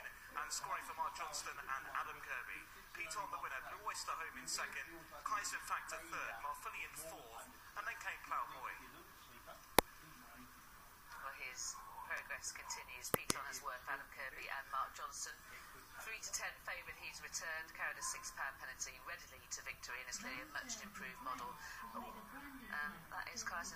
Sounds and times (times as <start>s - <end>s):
Speech: 0.0s - 10.5s, 11.1s - 23.7s.